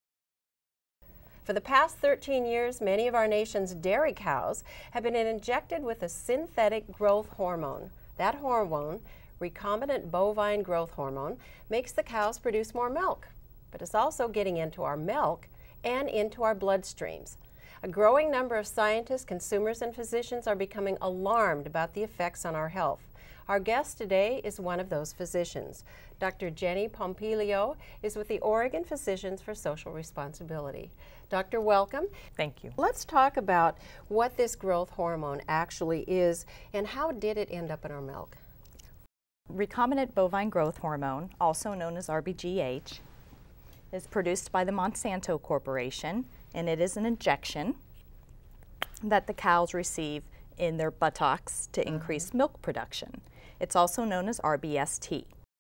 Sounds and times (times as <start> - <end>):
Speech: 1.5 - 38.4, 39.5 - 43.0, 43.9 - 47.8, 49.0 - 55.4.